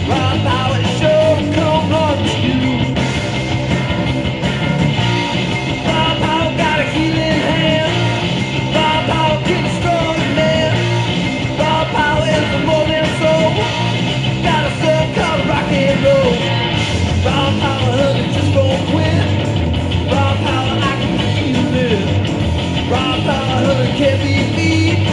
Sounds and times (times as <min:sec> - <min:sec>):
Music: 0:00.0 - 0:25.1.